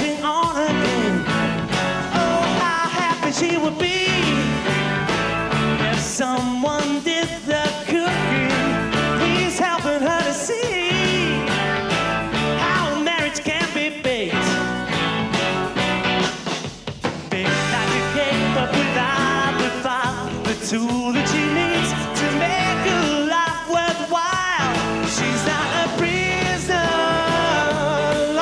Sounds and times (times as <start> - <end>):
Singing: 0.0 - 1.2, 2.1 - 4.6, 5.8 - 11.6, 12.6 - 14.7, 17.3 - 28.4
Music: 0.0 - 28.4.